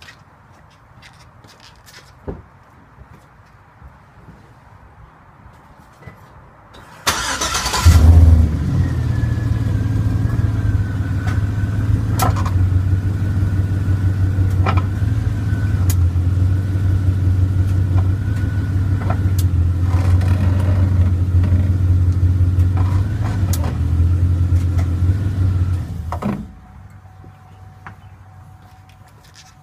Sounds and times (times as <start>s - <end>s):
Car: 6.7s - 29.6s.